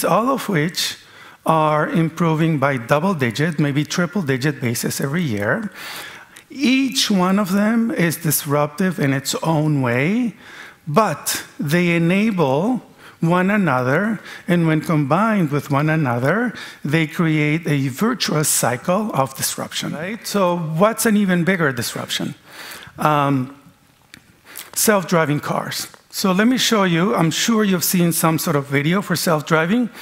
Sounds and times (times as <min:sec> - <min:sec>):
Speech: 0:00.0 - 0:05.7, 0:06.5 - 0:22.4, 0:23.0 - 0:23.6, 0:24.8 - 0:29.9.